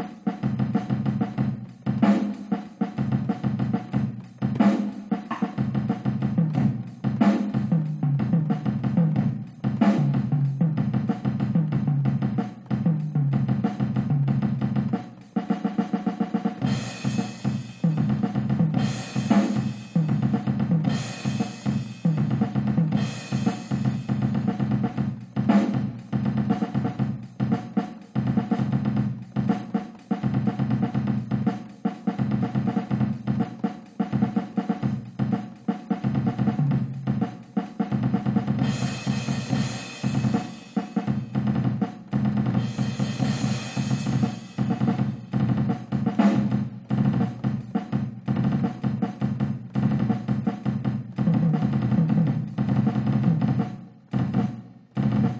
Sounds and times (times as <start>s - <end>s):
Drum: 0.0s - 55.4s
Drum machine: 0.0s - 55.4s.